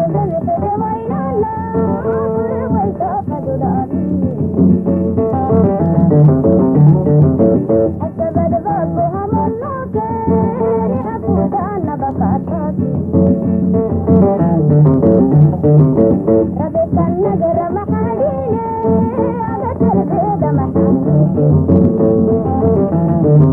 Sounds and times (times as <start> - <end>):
Middle Eastern music: 0.0 - 23.5.